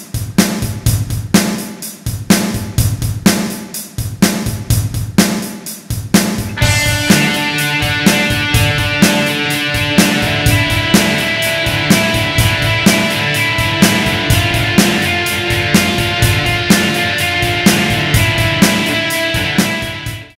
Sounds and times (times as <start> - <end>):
Music: 0.0 - 20.3.